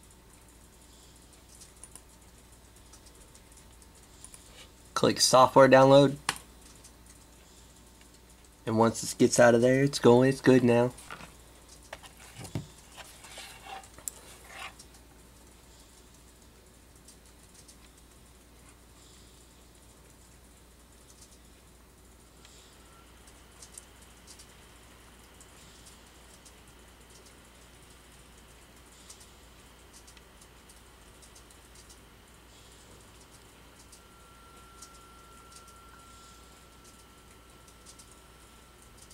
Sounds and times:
Inside, small room: 0:00.0 - 0:39.1
Typing: 0:00.6 - 0:04.5, 0:16.9 - 0:18.3, 0:20.1 - 0:21.5, 0:23.2 - 0:24.6, 0:25.2 - 0:32.0, 0:33.0 - 0:39.1
Speech: 0:05.0 - 0:06.2, 0:08.7 - 0:11.0.

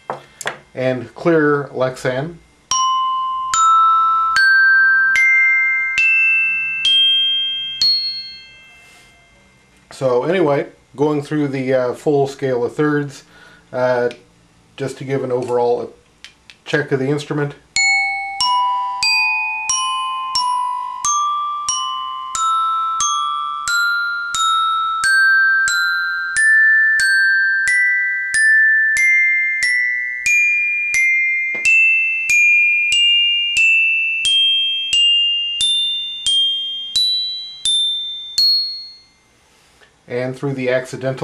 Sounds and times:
Musical instrument: 0:02.7 - 0:09.8, 0:17.8 - 0:39.3.

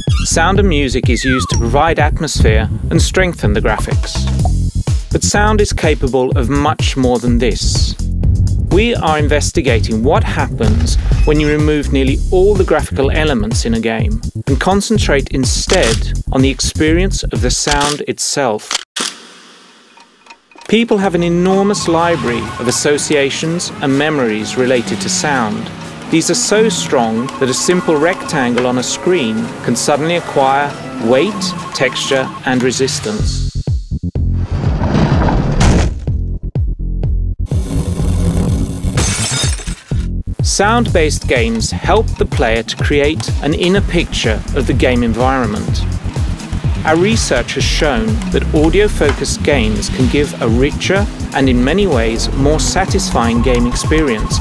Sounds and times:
Music: 0:00.0 - 0:17.8, 0:20.6 - 0:34.6, 0:36.0 - 0:54.4
Speech: 0:00.2 - 0:04.3, 0:05.1 - 0:08.0, 0:08.7 - 0:18.7, 0:20.7 - 0:33.5, 0:40.4 - 0:45.9, 0:46.8 - 0:54.4.

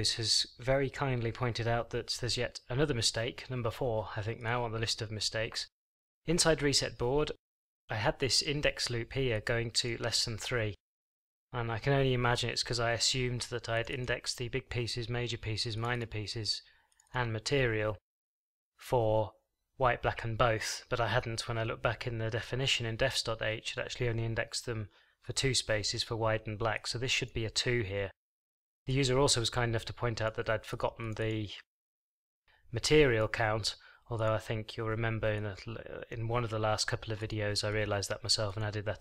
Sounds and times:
Speech: 0:00.0 - 0:10.8, 0:11.6 - 0:18.0, 0:18.8 - 0:28.2, 0:28.9 - 0:31.7, 0:32.7 - 0:39.0.

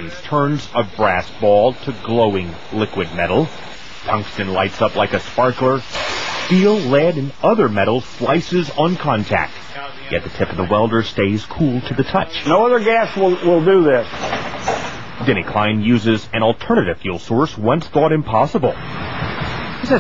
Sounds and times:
Speech: 0:00.0 - 0:03.5, 0:04.1 - 0:05.9, 0:06.5 - 0:14.1, 0:15.2 - 0:18.8.

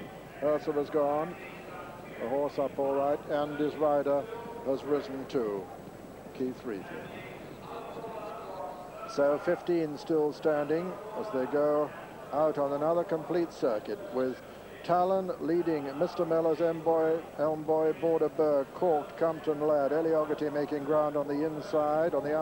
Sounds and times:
Speech: 0:00.0 - 0:22.4.

